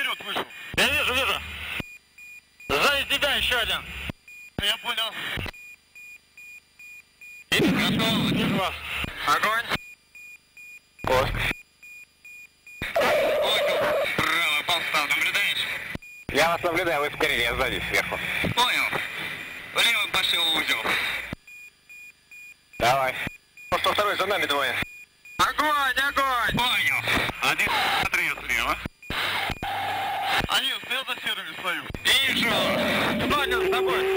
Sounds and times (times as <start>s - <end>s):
Speech: 0.0s - 1.4s, 13.5s - 19.0s, 19.8s - 20.9s, 22.8s - 24.8s, 25.4s - 28.8s, 30.5s - 34.1s.